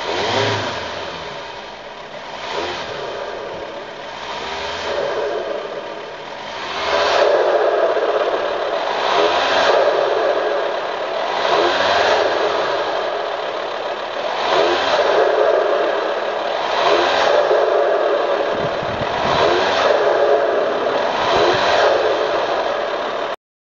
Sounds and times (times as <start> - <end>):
Accelerating, revving, vroom: 0.0 - 1.7, 2.3 - 5.7, 6.4 - 13.2, 14.2 - 23.3
Idling: 0.0 - 23.4
Medium engine (mid frequency): 0.0 - 23.4.